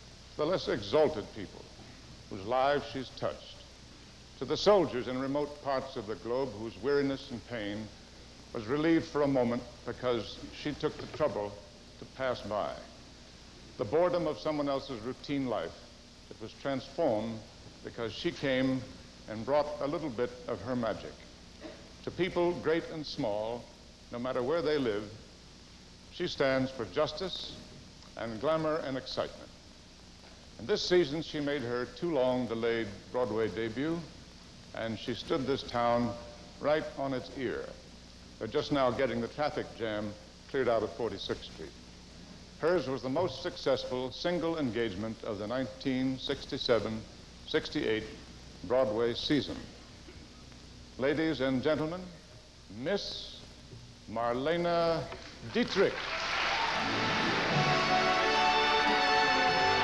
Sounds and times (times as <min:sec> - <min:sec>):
Narration, monologue: 0:00.0 - 0:56.1
Male speech, man speaking: 0:00.4 - 0:01.7, 0:02.3 - 0:03.7, 0:04.4 - 0:08.0, 0:08.6 - 0:13.0, 0:13.8 - 0:21.3, 0:22.1 - 0:25.2, 0:26.2 - 0:29.6, 0:30.6 - 0:37.8, 0:38.4 - 0:41.8, 0:42.6 - 0:49.7, 0:51.0 - 0:53.5, 0:54.1 - 0:56.0.